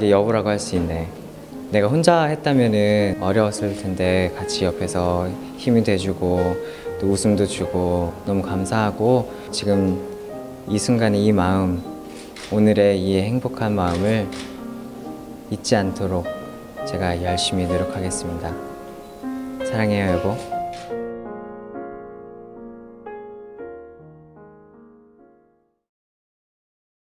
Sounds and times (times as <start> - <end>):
Male speech, man speaking: 0.0 - 1.1, 1.7 - 10.0, 10.7 - 11.8, 12.5 - 14.3, 15.5 - 16.3, 16.9 - 18.6, 19.7 - 20.5
Music: 0.0 - 25.9.